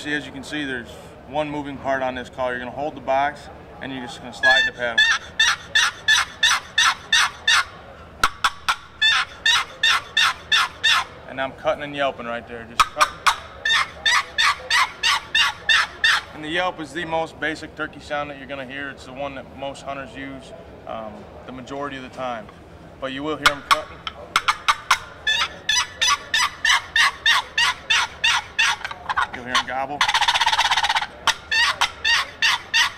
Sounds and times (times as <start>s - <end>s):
Turkey: 4.4s - 11.2s, 12.8s - 16.4s, 23.4s - 32.9s.